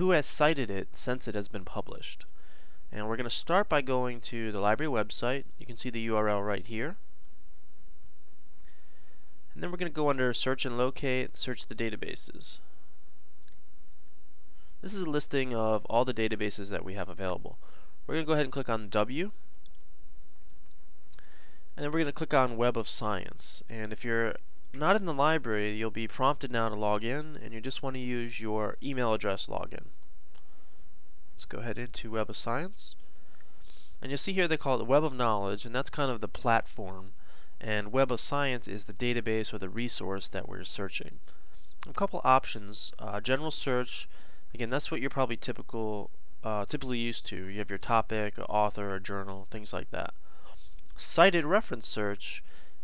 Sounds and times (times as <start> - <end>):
Speech: 0.0 - 2.3, 2.9 - 7.0, 9.5 - 12.7, 14.8 - 19.4, 21.8 - 30.0, 31.4 - 33.0, 34.0 - 41.2, 41.8 - 50.2, 51.0 - 52.5
Inside, small room: 0.0 - 52.8.